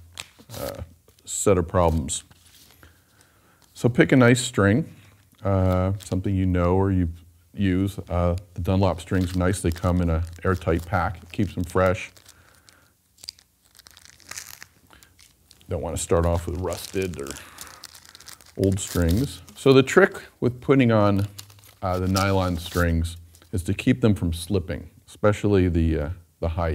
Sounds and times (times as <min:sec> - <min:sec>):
Speech: 0:00.5 - 0:02.3, 0:03.8 - 0:12.2, 0:15.7 - 0:17.4, 0:18.6 - 0:26.7.